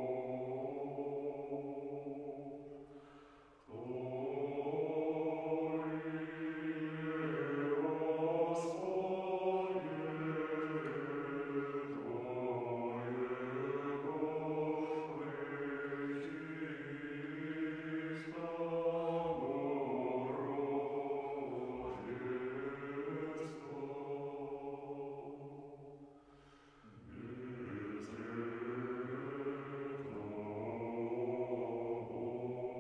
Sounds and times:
Mantra: 0.0 - 2.6, 3.7 - 25.7, 26.9 - 32.8.

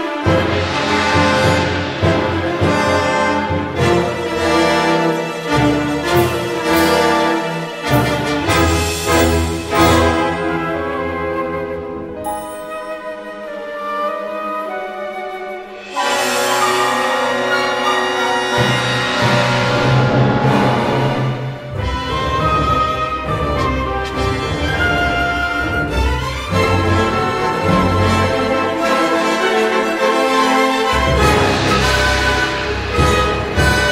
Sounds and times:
Music: 0.0 - 33.9.

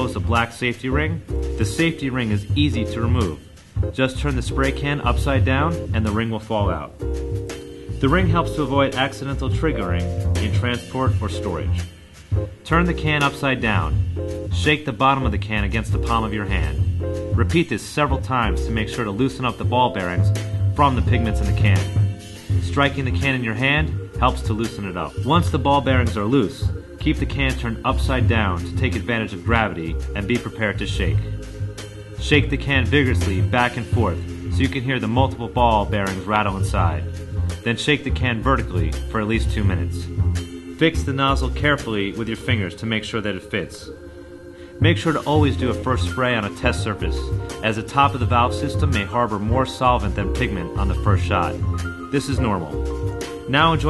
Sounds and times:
Speech: 0.0 - 7.0, 8.0 - 11.9, 12.6 - 31.3, 32.2 - 40.2, 40.8 - 44.0, 44.8 - 52.8, 53.5 - 53.9
Music: 0.0 - 53.9.

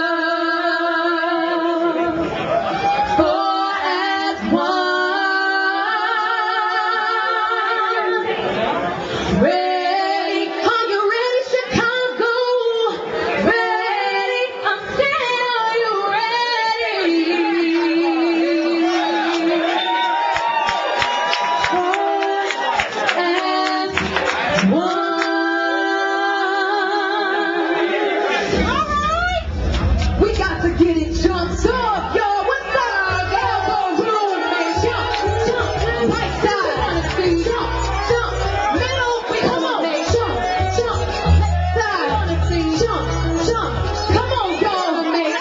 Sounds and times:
Music: 9.3 - 20.4, 21.0 - 45.4.

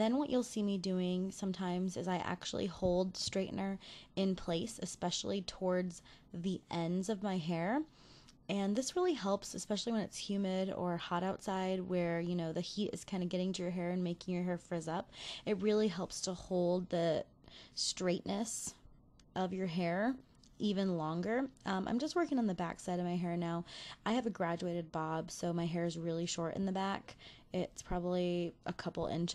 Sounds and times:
Narration, monologue: 0.0 - 29.3.

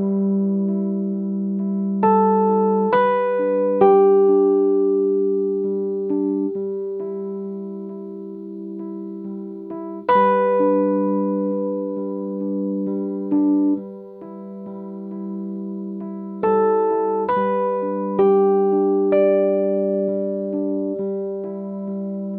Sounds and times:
Music: 0.0 - 22.3.

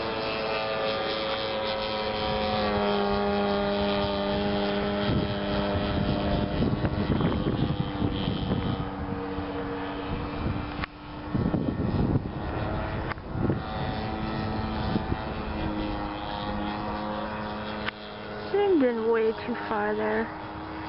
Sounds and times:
Aircraft: 0.0 - 20.8.

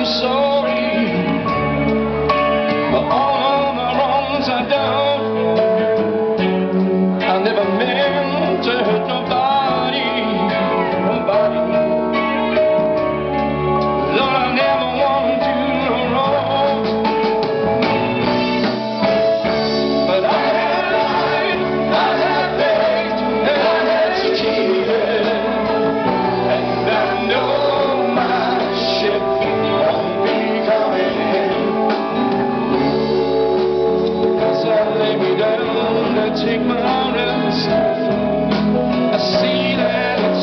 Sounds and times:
Music: 0.0 - 40.4.

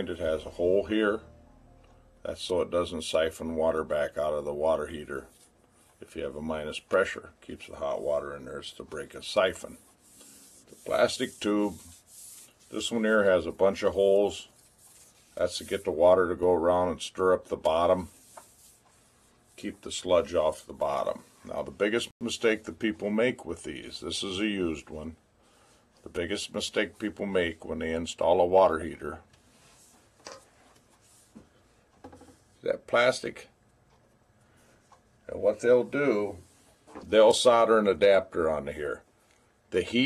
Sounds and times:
Speech: 0.0 - 1.3, 2.2 - 5.4, 6.0 - 9.9, 10.8 - 11.9, 12.7 - 14.5, 15.4 - 18.2, 19.6 - 25.2, 26.0 - 29.3, 32.6 - 33.6, 35.3 - 39.1, 39.7 - 40.0.

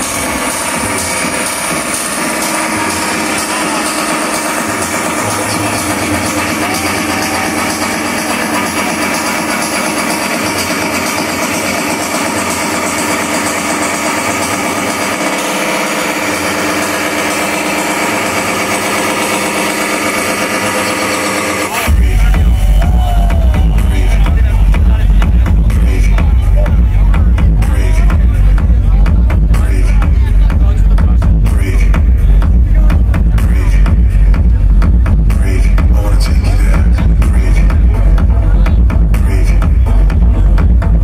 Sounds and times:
Music: 0.0 - 41.0
Speech: 0.8 - 12.2, 21.7 - 41.0.

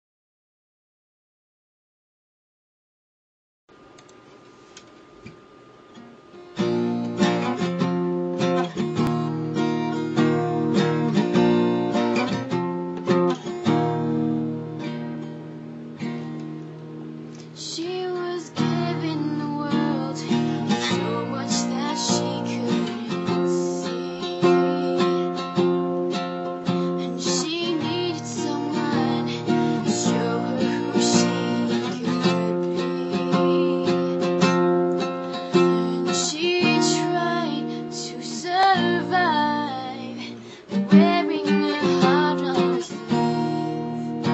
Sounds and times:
Music: 6.4 - 44.3
Female singing: 8.8 - 10.0, 17.6 - 25.6, 26.9 - 34.4, 35.5 - 44.3.

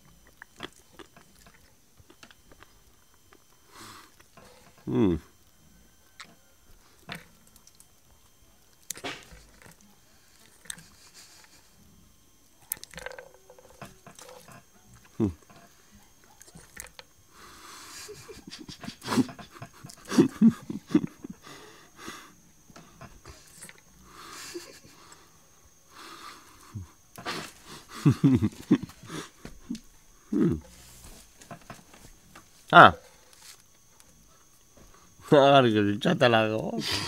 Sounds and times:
Speech: 35.3 - 36.9.

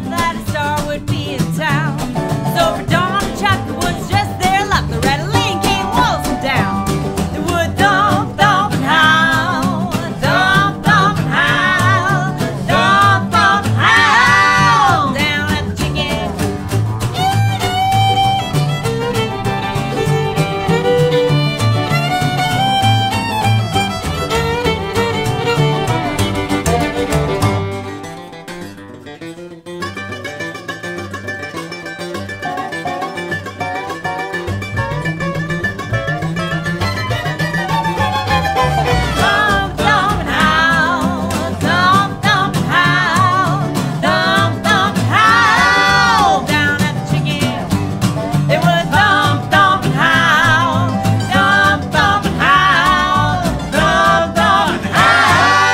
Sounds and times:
Bowed string instrument: 0.0 - 55.7
Country: 0.0 - 55.7
Guitar: 0.0 - 55.7
Singing: 7.4 - 16.3, 38.9 - 47.6, 48.5 - 55.7.

